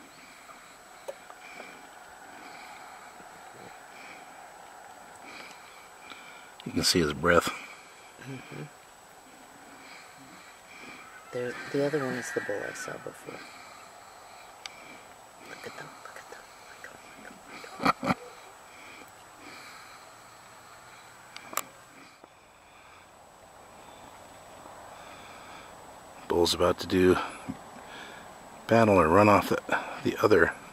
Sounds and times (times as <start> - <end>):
Speech: 6.7 - 7.6, 26.3 - 27.3, 28.7 - 30.6.